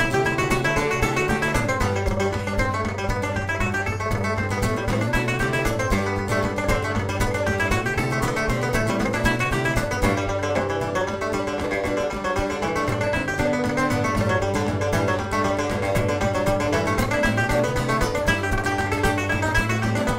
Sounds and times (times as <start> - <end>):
Banjo: 0.0 - 20.1
Country: 0.0 - 20.1
Guitar: 0.0 - 20.1.